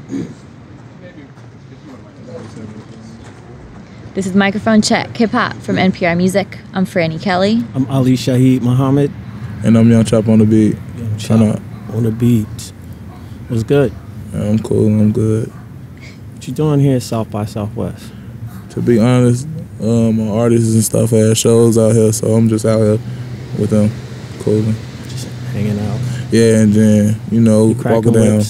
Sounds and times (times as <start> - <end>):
Speech: 18.7 - 23.0, 23.6 - 28.4.